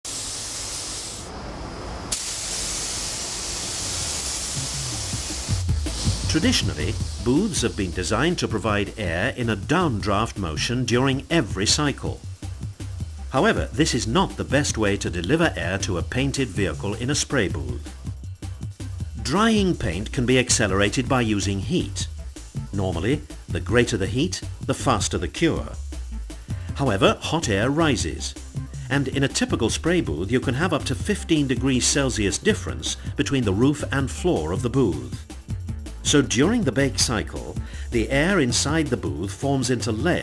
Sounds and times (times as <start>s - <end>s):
Hiss: 0.0s - 13.4s
Music: 3.7s - 40.2s
Speech: 6.3s - 12.2s, 13.3s - 17.8s, 19.2s - 22.1s, 22.7s - 25.8s, 26.8s - 35.2s, 36.0s - 40.2s.